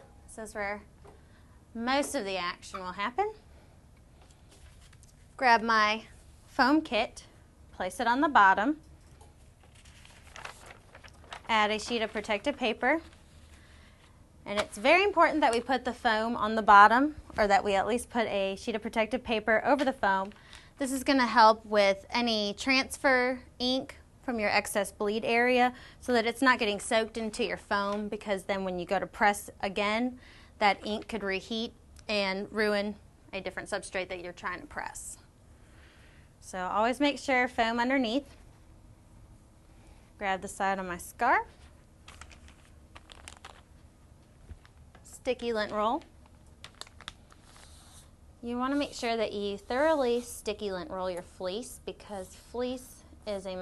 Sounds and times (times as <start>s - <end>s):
Inside, small room: 0.0s - 53.6s
Speech: 0.3s - 0.9s, 1.8s - 3.4s, 5.4s - 8.8s, 11.5s - 13.1s, 14.5s - 35.3s, 36.4s - 38.3s, 40.2s - 41.5s, 45.1s - 46.1s, 48.4s - 53.6s.